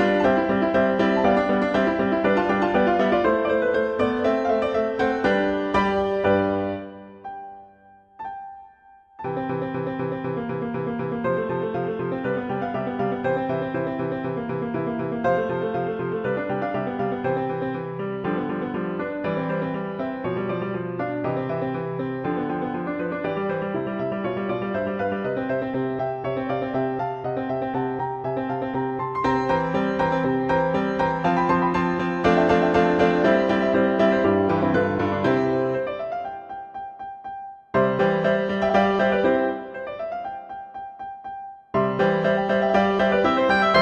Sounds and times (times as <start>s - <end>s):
Music: 0.0s - 43.8s.